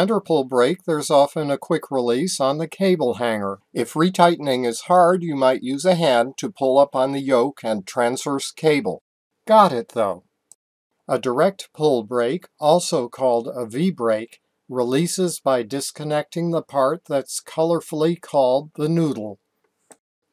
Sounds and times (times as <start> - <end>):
Speech: 0.0 - 10.2, 11.1 - 19.4.